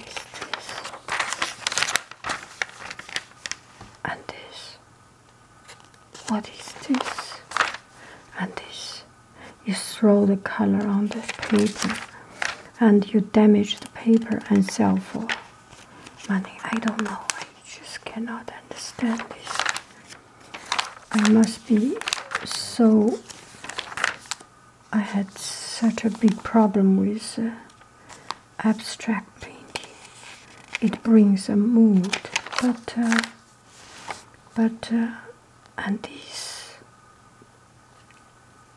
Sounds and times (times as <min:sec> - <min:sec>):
Inside, small room: 0:00.0 - 0:38.7
Speech: 0:06.2 - 0:07.5, 0:08.4 - 0:12.1, 0:12.8 - 0:15.4, 0:16.3 - 0:19.6, 0:21.1 - 0:23.2, 0:24.9 - 0:27.7, 0:28.6 - 0:29.8, 0:30.8 - 0:33.4, 0:34.6 - 0:36.8.